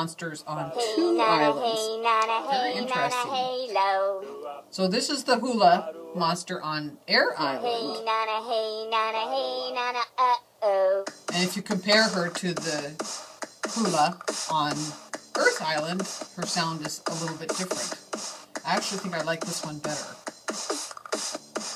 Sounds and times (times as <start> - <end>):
Music: 0.6 - 4.6, 11.0 - 21.7
Speech: 13.8 - 17.9, 18.7 - 20.1.